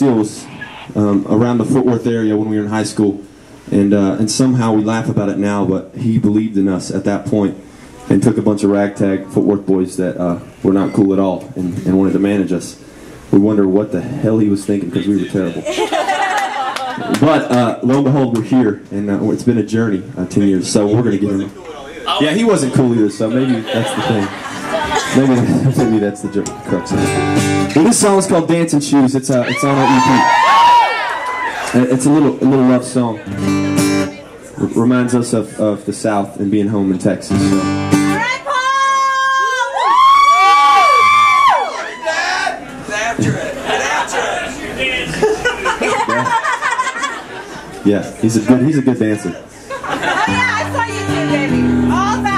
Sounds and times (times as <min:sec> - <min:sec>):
Speech: 0:00.0 - 0:15.7, 0:47.8 - 0:49.5.